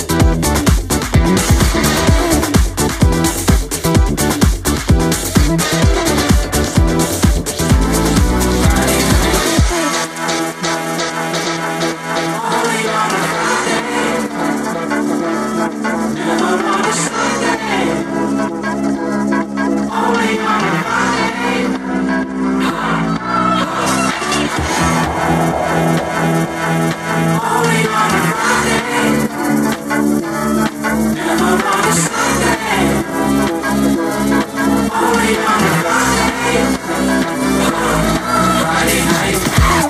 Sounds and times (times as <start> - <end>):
Music: 0.0 - 39.8.